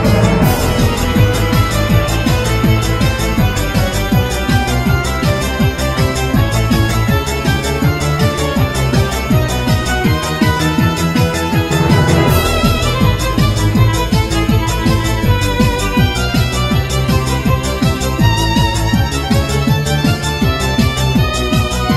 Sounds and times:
Music: 0.0 - 21.9.

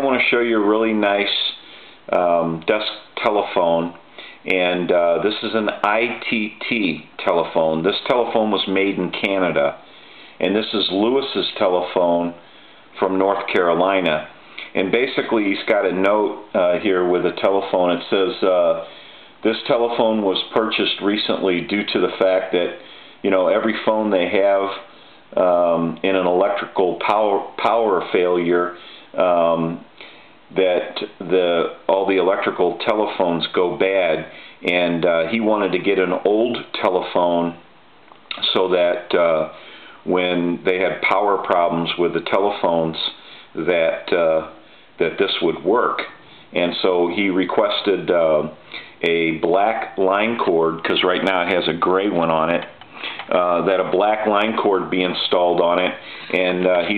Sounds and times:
Speech: 0.0 - 29.9, 30.5 - 37.7, 38.3 - 56.9.

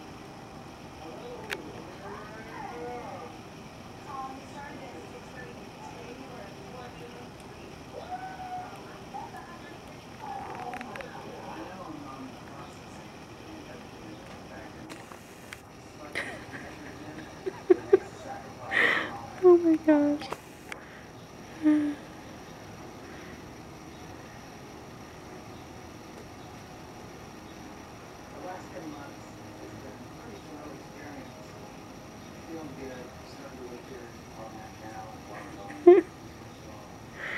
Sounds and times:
Speech: 15.9 - 20.3.

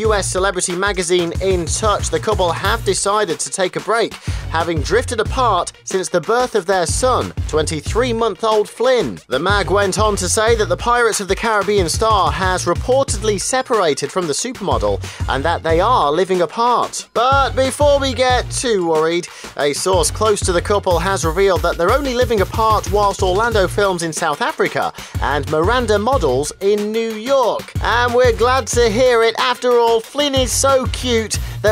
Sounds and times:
Music: 0.0 - 31.7
Speech: 0.0 - 31.7.

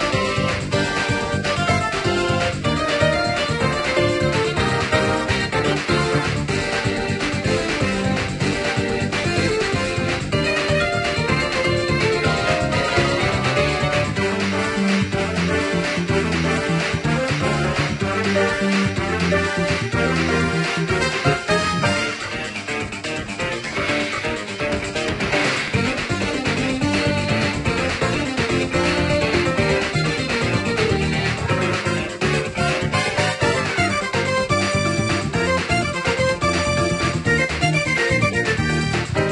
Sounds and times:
Music: 0.0 - 39.3.

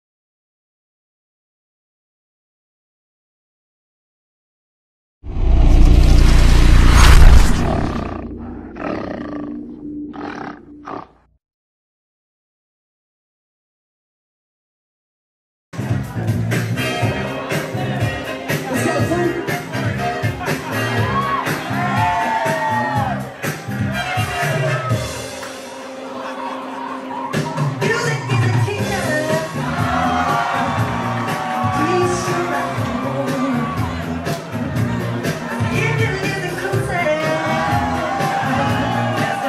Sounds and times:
Silence: 5.3 - 8.4
Roar: 7.0 - 11.3.

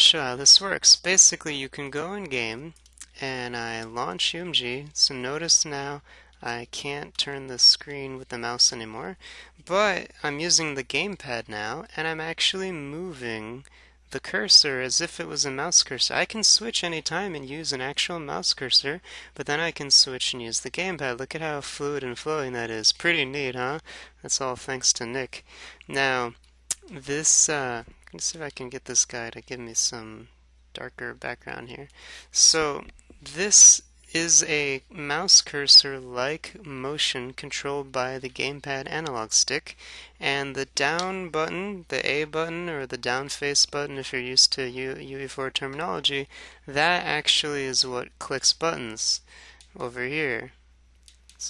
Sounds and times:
Speech: 0.0 - 50.6.

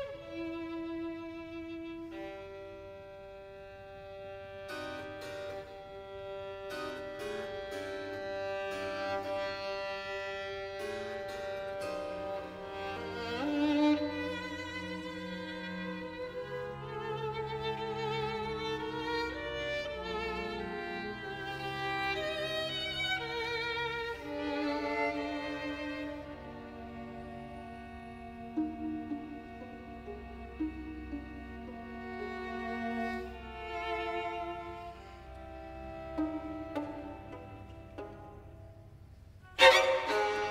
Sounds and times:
Violin, fiddle: 0.0 - 40.5.

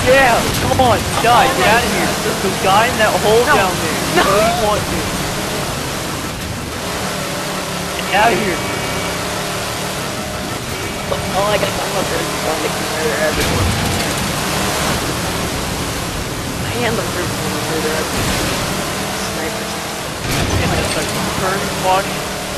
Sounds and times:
Speech: 0.0 - 6.1, 8.0 - 9.2, 10.4 - 15.5, 16.6 - 22.5
Pink noise: 0.0 - 22.5.

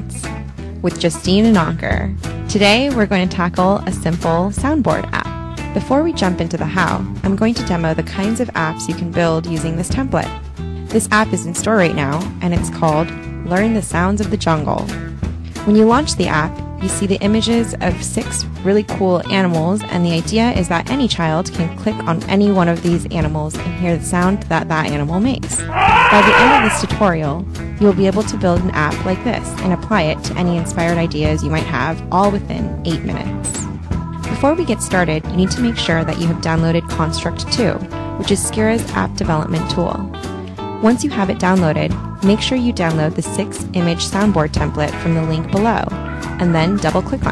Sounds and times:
Speech: 0.0 - 10.3, 11.0 - 14.9, 15.6 - 33.7, 34.3 - 40.1, 40.8 - 47.3
Music: 0.0 - 47.3.

